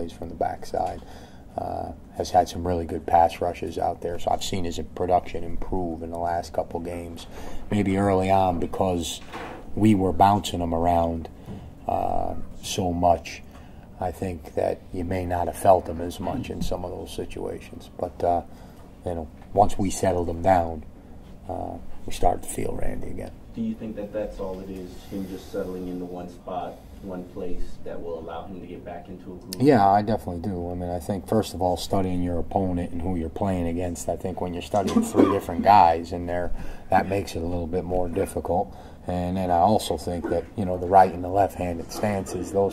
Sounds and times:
Speech: 0.0s - 1.0s, 1.6s - 9.2s, 9.8s - 11.3s, 11.9s - 13.4s, 14.0s - 20.8s, 21.5s - 42.7s
Inside, small room: 0.0s - 42.7s.

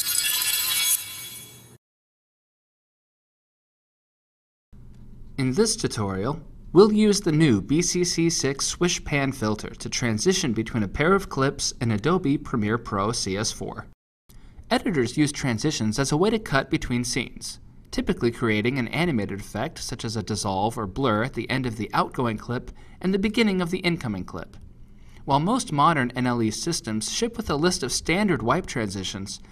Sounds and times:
Speech: 5.4s - 14.0s, 14.7s - 24.6s, 25.2s - 29.5s.

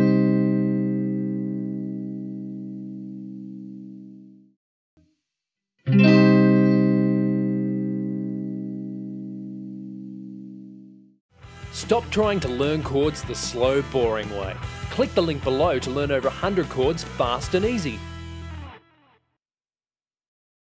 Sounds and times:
Speech: 11.7s - 18.0s.

